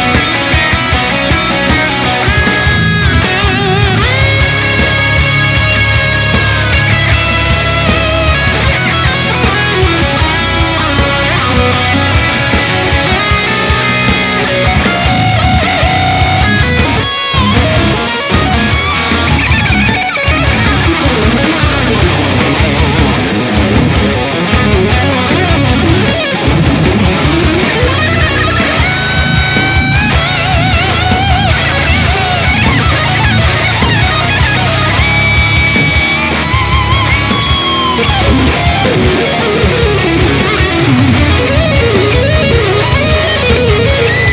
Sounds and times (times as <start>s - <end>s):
Electric guitar: 0.0s - 44.3s
Strum: 0.0s - 44.3s.